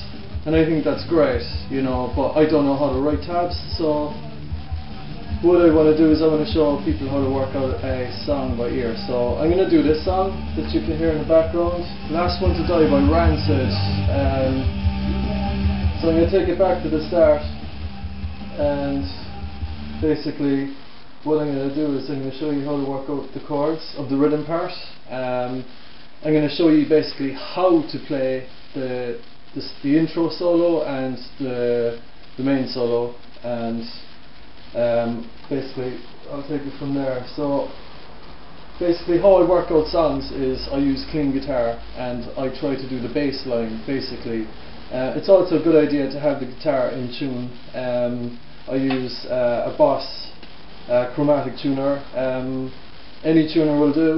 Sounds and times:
Speech: 0:00.0 - 0:14.7, 0:16.0 - 0:17.6, 0:18.5 - 0:19.3, 0:20.0 - 0:37.8, 0:38.8 - 0:54.1
Music: 0:00.0 - 0:22.1.

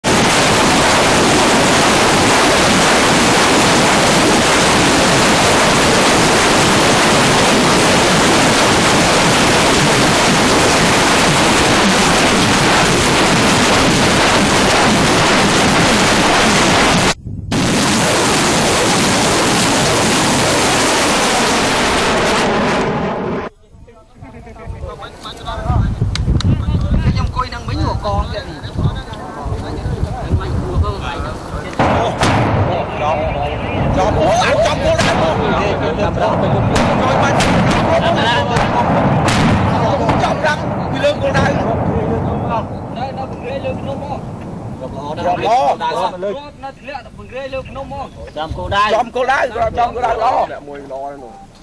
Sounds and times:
Outside, rural or natural: 0:00.0 - 0:51.6.

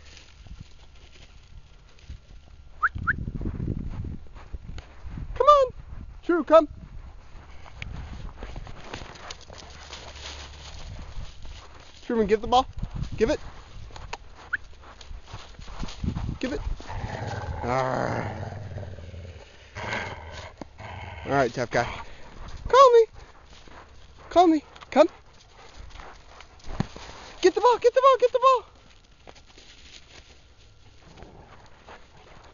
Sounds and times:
Outside, rural or natural: 0:00.0 - 0:32.5
Speech: 0:05.4 - 0:06.8, 0:12.0 - 0:13.4, 0:16.4 - 0:16.7, 0:21.2 - 0:22.0, 0:22.7 - 0:23.1, 0:24.3 - 0:25.2, 0:27.4 - 0:28.7
Growling: 0:16.8 - 0:22.1.

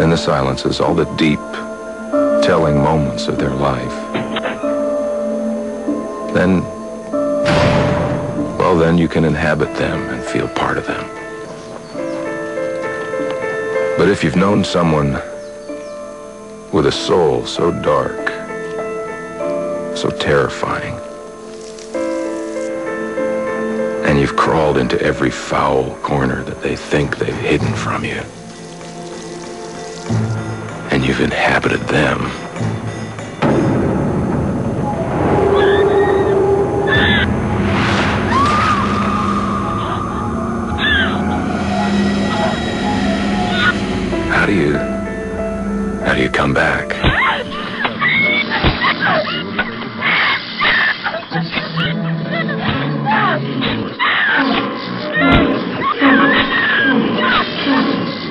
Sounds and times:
Music: 0:00.0 - 0:58.3
Speech: 0:08.6 - 0:11.1, 0:14.0 - 0:15.2, 0:24.0 - 0:28.3, 0:30.9 - 0:32.4, 0:44.3 - 0:44.9, 0:46.0 - 0:47.0.

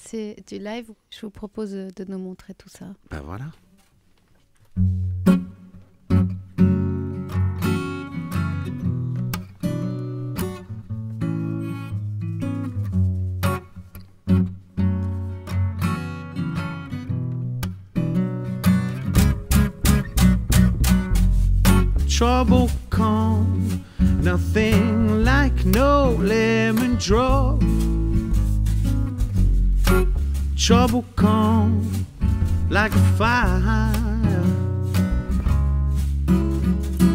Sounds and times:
Music: 0:04.7 - 0:37.1.

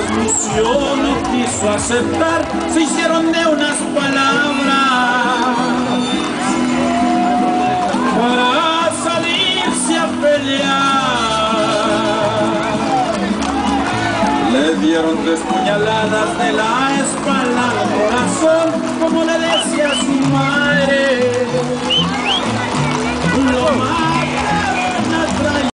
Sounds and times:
Clip-clop: 0:00.0 - 0:25.7
Music: 0:00.0 - 0:25.7.

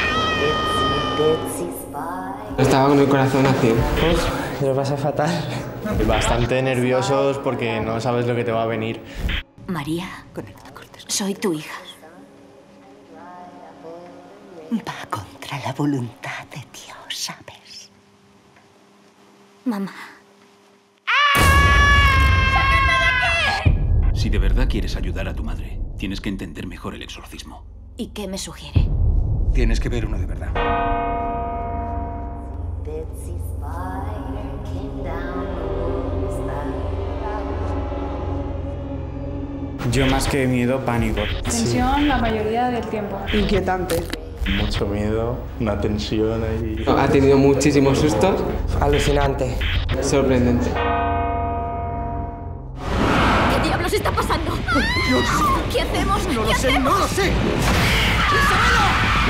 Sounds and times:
Music: 0:00.0 - 0:04.7, 0:05.8 - 0:16.9, 0:22.6 - 0:56.4.

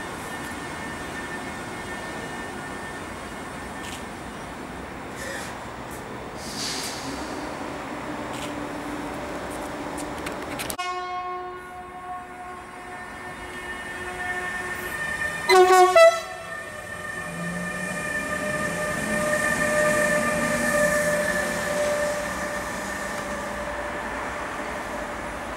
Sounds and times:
Railroad car, train wagon: 0:00.0 - 0:25.5
Train: 0:00.0 - 0:25.5
Vehicle horn, car horn, honking: 0:10.8 - 0:12.4, 0:15.5 - 0:16.4.

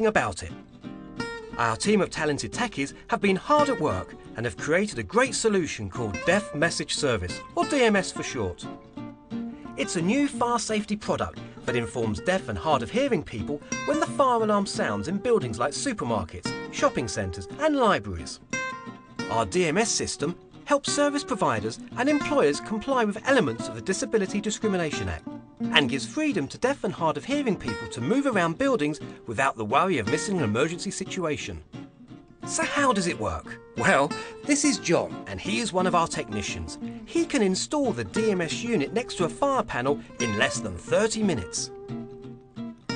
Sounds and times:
Speech: 0:00.0 - 0:00.6, 0:01.6 - 0:08.7, 0:09.8 - 0:18.4, 0:19.3 - 0:31.6, 0:32.5 - 0:41.7
Music: 0:00.0 - 0:42.9.

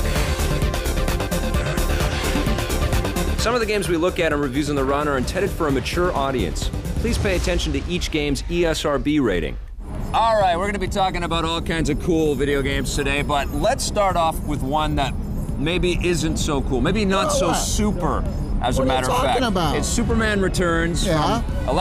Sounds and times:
Music: 0:00.0 - 0:08.6, 0:09.8 - 0:21.8
Speech: 0:03.4 - 0:09.6, 0:10.2 - 0:21.8.

